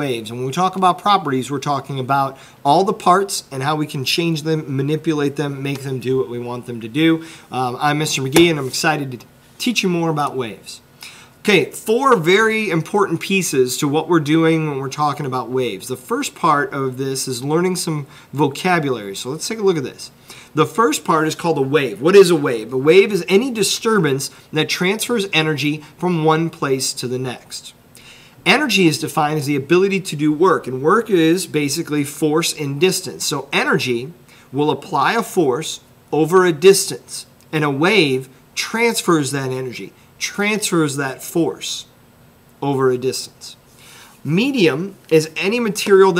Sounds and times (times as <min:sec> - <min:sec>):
Speech: 0:00.0 - 0:10.8, 0:11.4 - 0:27.8, 0:28.5 - 0:41.9, 0:42.6 - 0:43.6, 0:44.2 - 0:46.2.